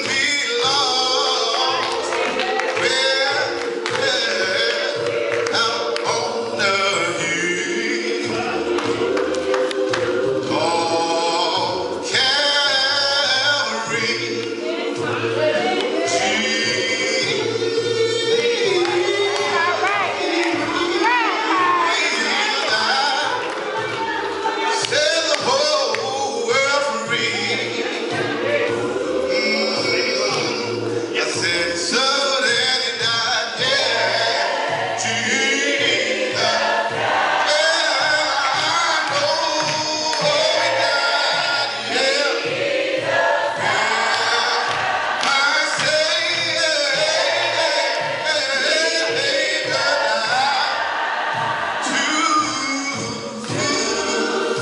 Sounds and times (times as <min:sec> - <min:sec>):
Male singing: 0:00.0 - 0:08.8, 0:10.5 - 0:23.6, 0:24.6 - 0:36.6, 0:37.4 - 0:42.4, 0:43.6 - 0:50.8, 0:51.8 - 0:54.6
Choir: 0:00.0 - 0:54.6.